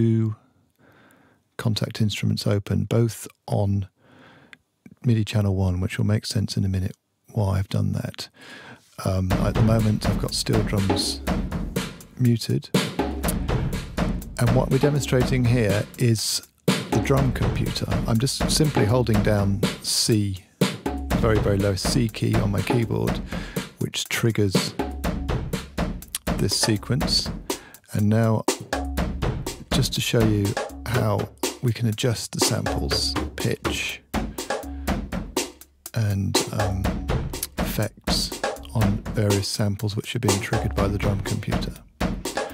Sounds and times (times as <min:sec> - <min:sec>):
Speech: 0:00.0 - 0:00.4, 0:01.6 - 0:03.9, 0:04.9 - 0:08.4, 0:09.0 - 0:11.2, 0:12.2 - 0:12.8, 0:14.4 - 0:20.5, 0:21.1 - 0:24.8, 0:26.2 - 0:27.3, 0:27.9 - 0:28.6, 0:29.6 - 0:34.0, 0:36.0 - 0:41.8
Drum: 0:09.2 - 0:42.5.